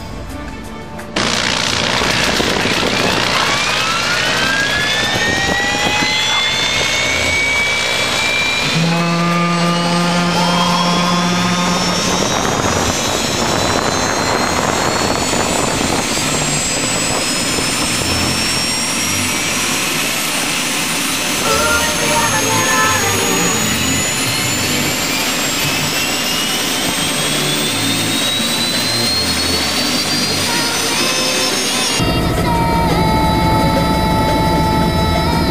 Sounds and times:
Helicopter: 0.0s - 35.5s
Outside, rural or natural: 0.0s - 35.5s.

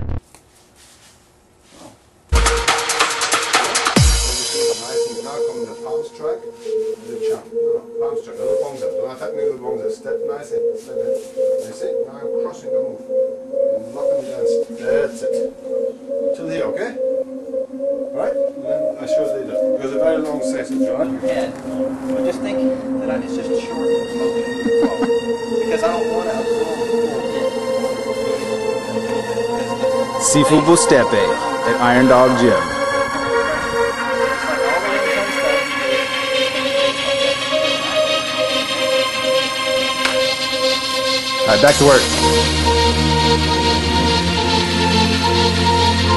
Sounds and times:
Music: 2.3s - 46.1s
Speech: 4.4s - 6.4s, 7.0s - 10.6s, 11.6s - 13.0s, 13.8s - 15.5s, 16.4s - 17.0s, 18.2s - 21.6s, 30.2s - 32.7s, 41.5s - 42.1s.

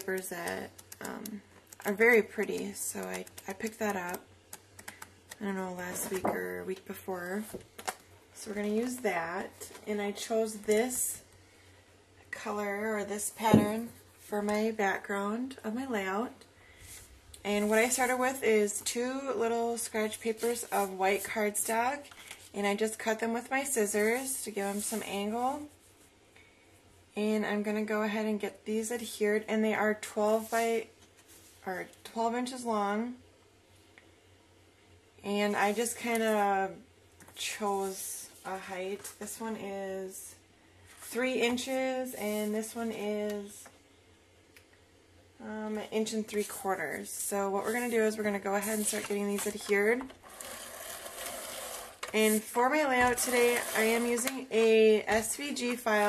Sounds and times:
Speech: 0.0s - 4.3s, 5.4s - 7.6s, 8.4s - 11.2s, 12.3s - 16.4s, 17.4s - 25.7s, 27.2s - 30.9s, 31.6s - 33.2s, 35.2s - 40.4s, 41.1s - 43.7s, 45.4s - 50.1s, 52.1s - 56.0s.

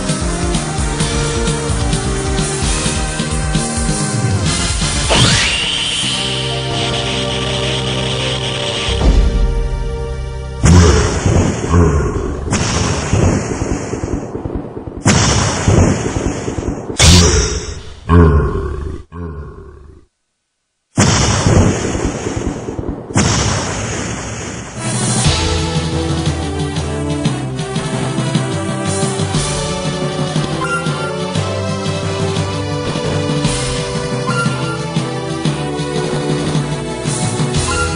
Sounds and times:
Burping, eructation: 11.7s - 12.4s, 18.0s - 20.1s.

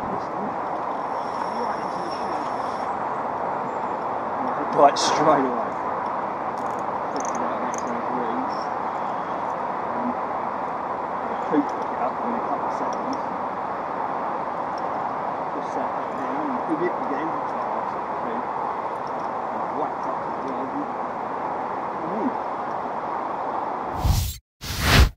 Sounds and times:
Speech: 0.0s - 0.6s, 1.4s - 2.8s, 4.4s - 5.8s, 7.2s - 8.6s, 9.9s - 10.2s, 11.3s - 13.2s, 15.6s - 18.4s, 19.5s - 21.0s, 22.0s - 22.4s.

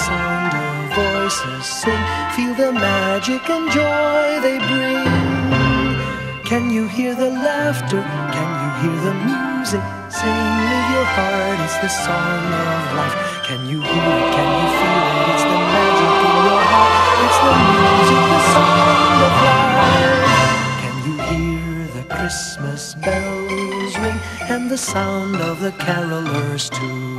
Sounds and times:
Music: 0.0s - 27.1s.

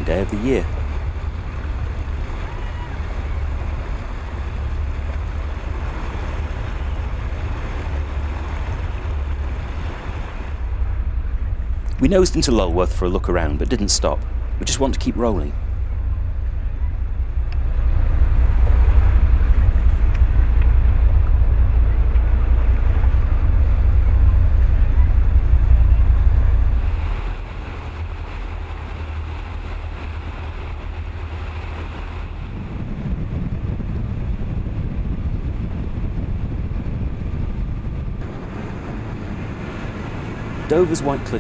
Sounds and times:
Speech: 0.0s - 0.7s, 12.0s - 15.6s, 40.7s - 41.4s
Boat, Water vehicle: 0.0s - 41.4s
Ocean: 0.0s - 41.4s.

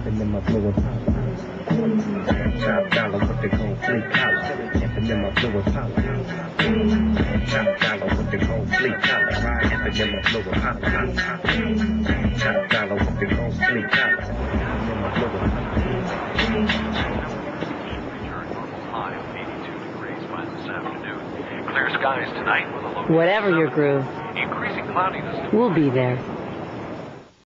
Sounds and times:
Speech: 18.0s - 26.2s.

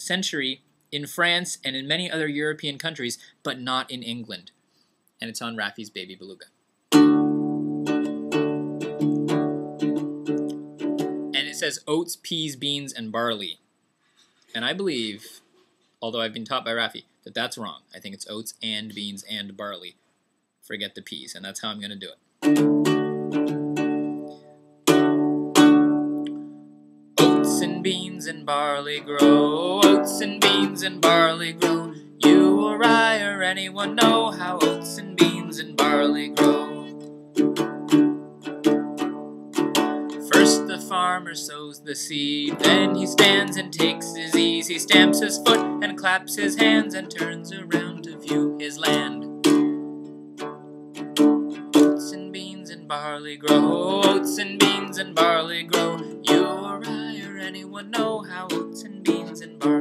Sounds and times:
Speech: 0.0s - 4.5s, 5.2s - 6.5s, 11.4s - 13.6s, 14.5s - 15.4s, 16.0s - 20.0s, 20.6s - 22.2s
Music: 6.9s - 11.6s, 22.4s - 59.8s
Male singing: 27.2s - 36.9s, 40.3s - 49.3s, 51.8s - 59.8s.

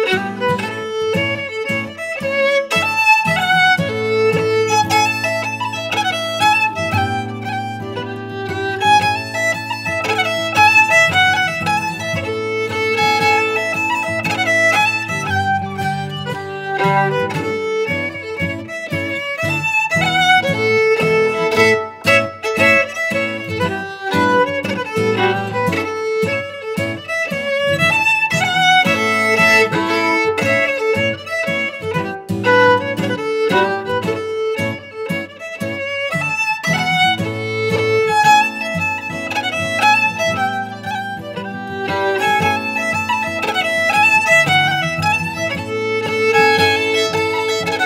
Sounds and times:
Violin, fiddle: 0.0s - 47.8s.

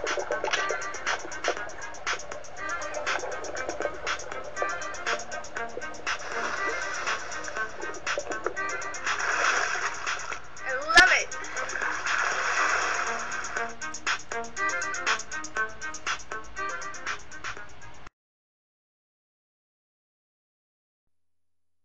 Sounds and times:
Music: 0.0s - 18.1s
Speech: 10.6s - 11.4s.

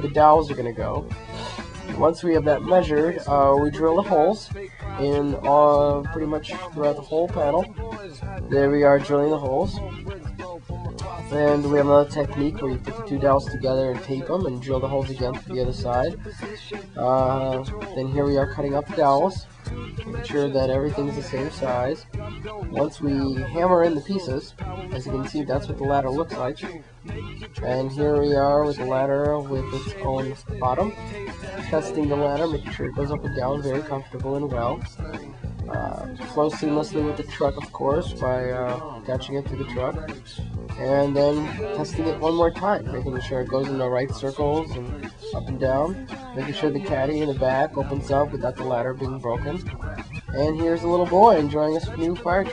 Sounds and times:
Speech: 0.0s - 1.1s, 2.0s - 10.0s, 11.0s - 31.0s, 31.6s - 52.5s
Music: 0.0s - 52.5s.

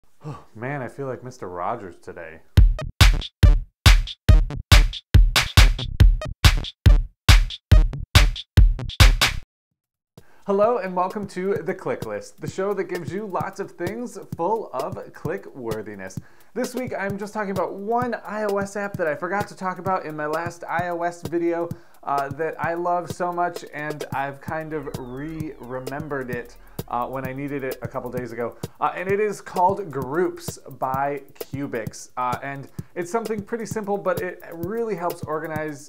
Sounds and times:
Speech: 0.2s - 2.5s, 10.5s - 35.8s
Drum machine: 2.6s - 9.4s, 11.0s - 35.8s.

